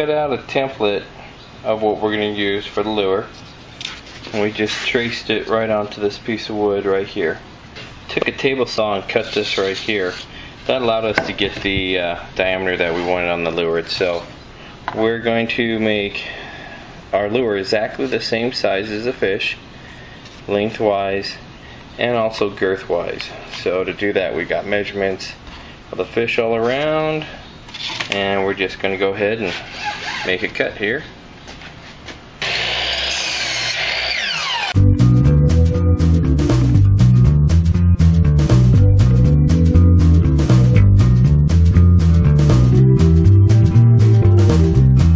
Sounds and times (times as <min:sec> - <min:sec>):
Speech: 0:00.0 - 0:03.4, 0:04.3 - 0:07.4, 0:08.1 - 0:14.3, 0:14.9 - 0:16.4, 0:17.1 - 0:19.6, 0:20.5 - 0:27.4, 0:28.1 - 0:31.2.